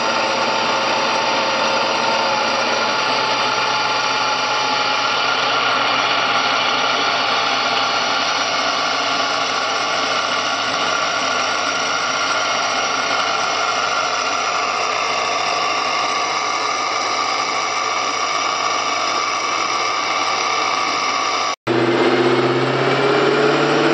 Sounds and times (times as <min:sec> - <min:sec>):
Car: 0:00.0 - 0:23.9
Engine: 0:00.0 - 0:23.9.